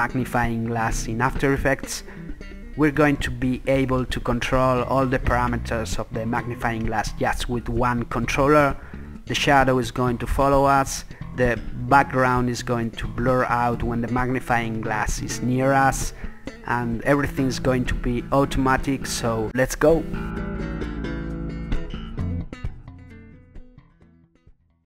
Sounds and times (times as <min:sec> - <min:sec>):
Speech: 0:00.0 - 0:02.0, 0:02.8 - 0:20.2
Music: 0:00.0 - 0:24.8.